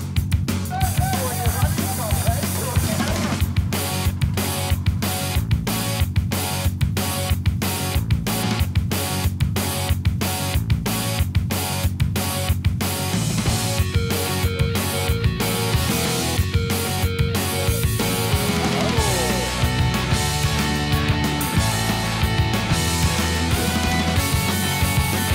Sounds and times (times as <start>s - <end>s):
Music: 0.0s - 25.3s.